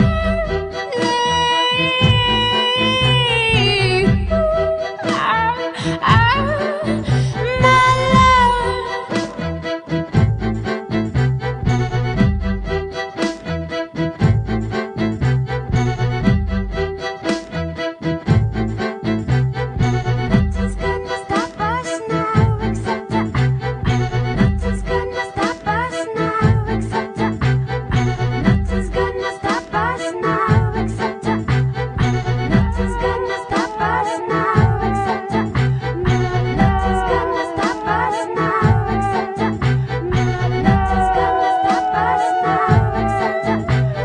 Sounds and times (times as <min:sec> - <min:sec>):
Music: 0:00.0 - 0:44.0.